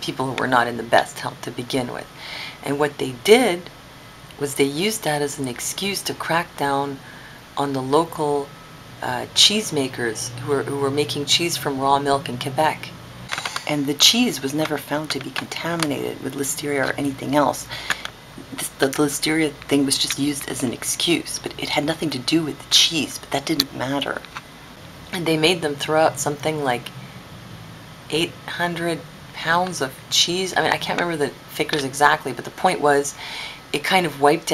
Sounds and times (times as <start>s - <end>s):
Speech: 0.0s - 3.7s, 4.3s - 7.0s, 7.6s - 17.8s, 18.4s - 24.3s, 25.1s - 26.9s, 28.1s - 34.5s
Inside, small room: 0.0s - 34.5s.